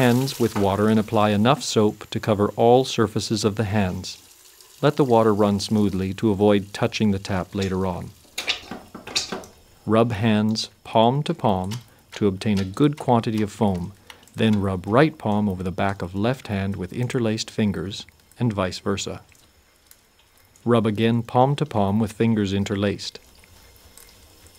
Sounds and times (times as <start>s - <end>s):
Speech: 0.0s - 4.2s, 4.8s - 8.2s, 9.9s - 19.3s, 20.6s - 23.2s
Water: 0.0s - 24.5s.